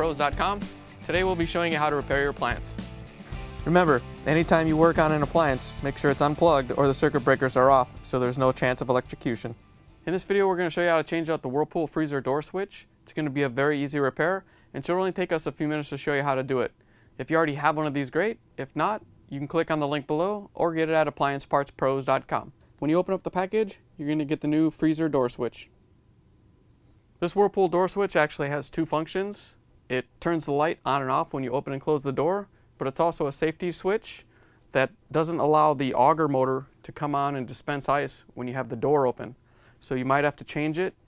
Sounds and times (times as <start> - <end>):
Speech: 0.0 - 2.8, 3.6 - 25.7, 27.2 - 41.0.